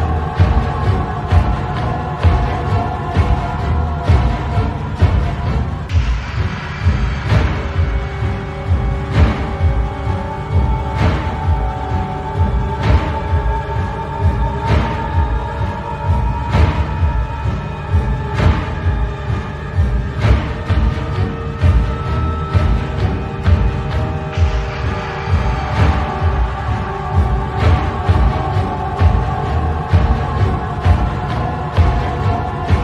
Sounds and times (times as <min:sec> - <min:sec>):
Scary music: 0:00.0 - 0:32.8.